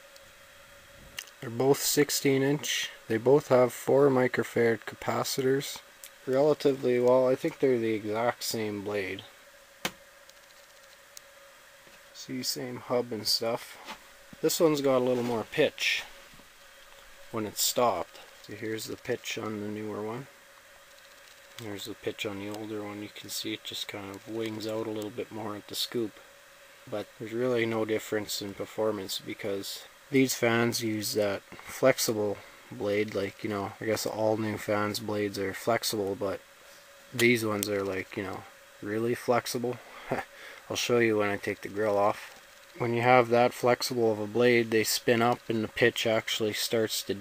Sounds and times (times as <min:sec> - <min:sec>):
Speech: 0:01.4 - 0:09.4, 0:12.2 - 0:16.1, 0:17.3 - 0:20.3, 0:21.6 - 0:26.2, 0:26.9 - 0:36.4, 0:37.1 - 0:47.2.